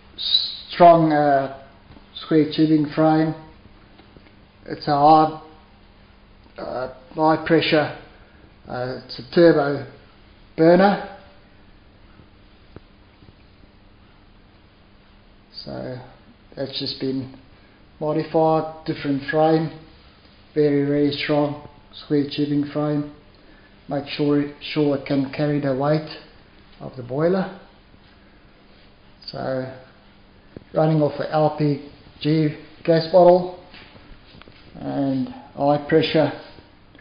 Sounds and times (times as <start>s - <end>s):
Speech: 0.2s - 3.6s, 4.6s - 5.6s, 6.6s - 8.1s, 8.7s - 10.0s, 10.6s - 11.4s, 15.5s - 17.4s, 18.0s - 19.9s, 20.6s - 23.2s, 23.9s - 27.7s, 29.2s - 30.0s, 30.7s - 33.7s, 34.8s - 36.6s.